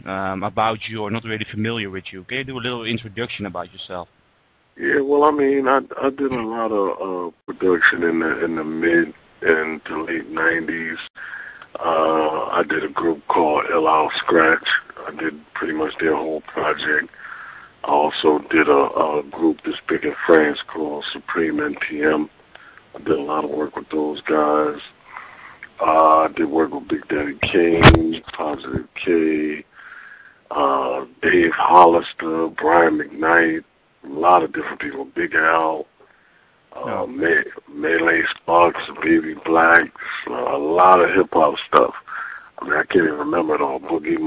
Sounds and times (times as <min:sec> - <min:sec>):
Speech: 0:00.0 - 0:04.1, 0:04.8 - 0:17.2, 0:17.8 - 0:22.3, 0:22.9 - 0:25.0, 0:25.6 - 0:29.7, 0:30.5 - 0:35.9, 0:36.7 - 0:44.2.